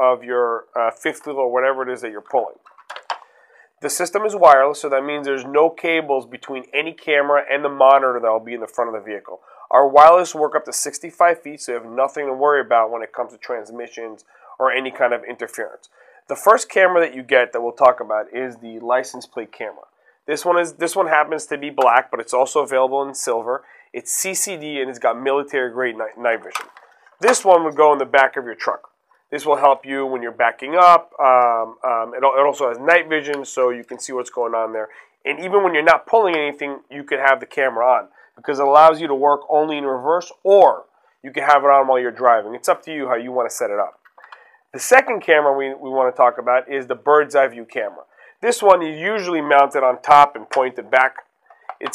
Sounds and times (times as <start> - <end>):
Speech: 0.0 - 2.6, 3.8 - 44.0, 44.8 - 51.2.